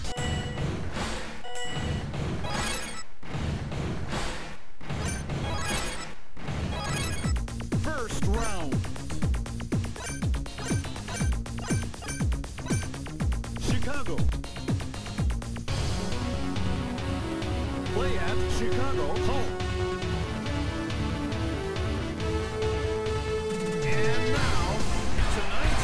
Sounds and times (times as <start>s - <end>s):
Music: 0.0s - 2.7s, 3.3s - 25.8s
Speech: 7.8s - 8.8s, 13.6s - 14.3s, 17.9s - 19.6s.